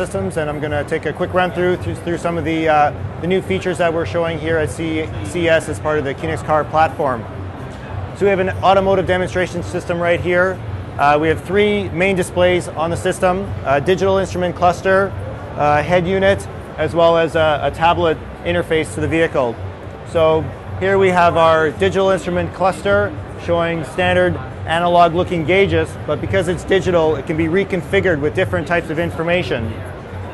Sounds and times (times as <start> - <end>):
Speech: 0.0 - 7.4, 8.2 - 29.9.